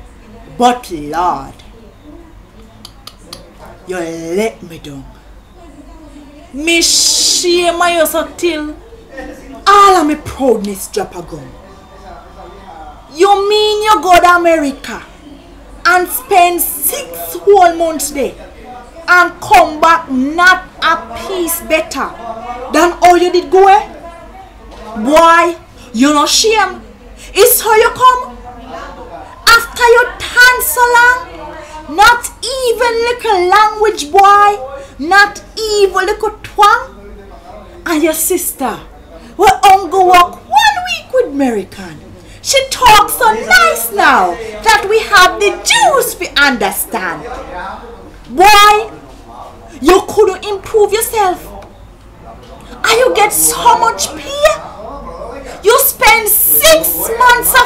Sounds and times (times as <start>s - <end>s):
Speech: 0.0s - 57.6s.